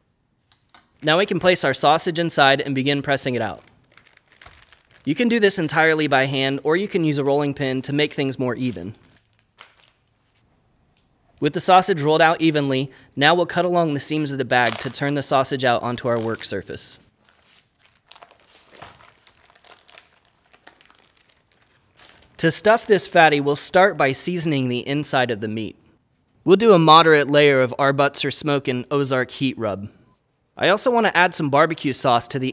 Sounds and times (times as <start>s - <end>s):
Speech: 1.0s - 3.6s, 5.1s - 9.0s, 11.4s - 17.0s, 22.4s - 25.8s, 26.4s - 30.0s, 30.6s - 32.5s.